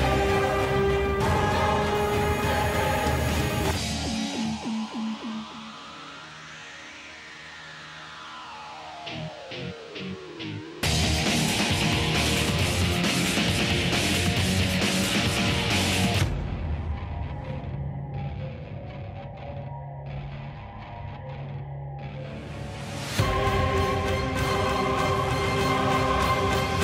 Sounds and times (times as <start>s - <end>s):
Music: 0.0s - 26.8s.